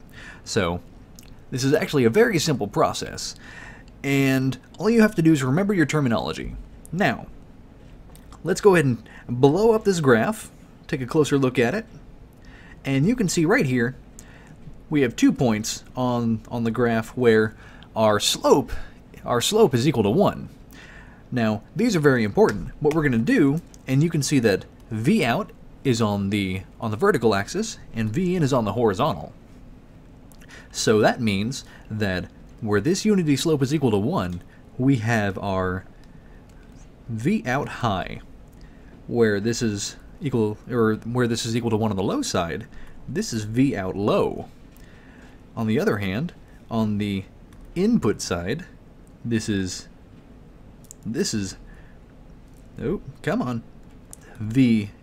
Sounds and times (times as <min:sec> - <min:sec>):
Speech: 0:00.5 - 0:00.9, 0:01.5 - 0:03.4, 0:04.0 - 0:07.4, 0:08.4 - 0:12.0, 0:12.8 - 0:14.0, 0:14.9 - 0:20.5, 0:21.3 - 0:29.4, 0:30.7 - 0:35.9, 0:37.1 - 0:38.3, 0:39.1 - 0:44.5, 0:45.6 - 0:49.9, 0:51.0 - 0:51.6, 0:52.8 - 0:55.0.